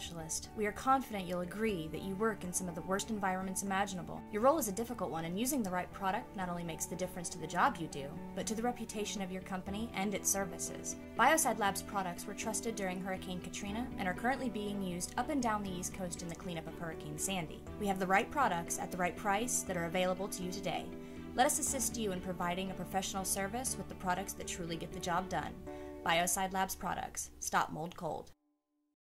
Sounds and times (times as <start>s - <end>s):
Music: 0.0s - 28.4s
Speech: 0.0s - 28.4s.